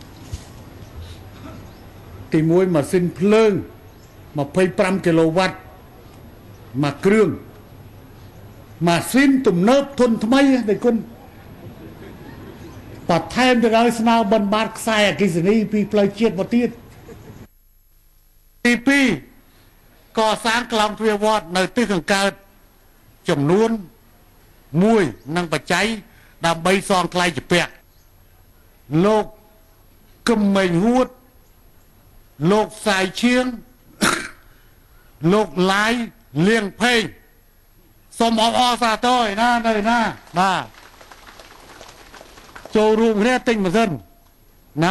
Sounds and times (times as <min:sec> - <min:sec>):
Narration, monologue: 0:01.2 - 0:11.9, 0:12.5 - 0:41.0, 0:42.4 - 0:44.9
Male speech, man speaking: 0:02.3 - 0:03.7, 0:04.4 - 0:05.7, 0:06.8 - 0:07.5, 0:08.8 - 0:11.2, 0:13.1 - 0:16.8, 0:18.6 - 0:19.3, 0:20.2 - 0:22.5, 0:23.3 - 0:23.9, 0:24.7 - 0:27.8, 0:28.9 - 0:29.4, 0:30.3 - 0:31.2, 0:32.4 - 0:33.7, 0:35.2 - 0:37.2, 0:38.1 - 0:40.7, 0:42.8 - 0:44.1.